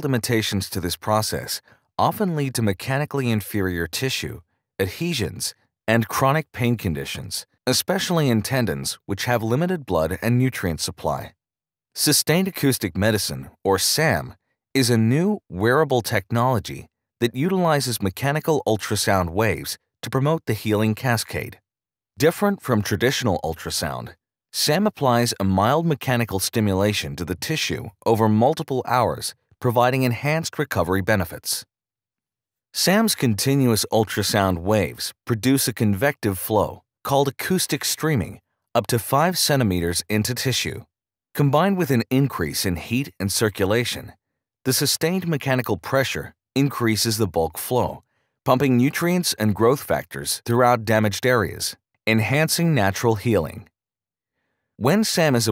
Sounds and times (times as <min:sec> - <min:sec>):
Speech: 0:00.0 - 0:11.4, 0:12.0 - 0:21.6, 0:22.2 - 0:31.7, 0:32.8 - 0:53.7, 0:54.8 - 0:55.5.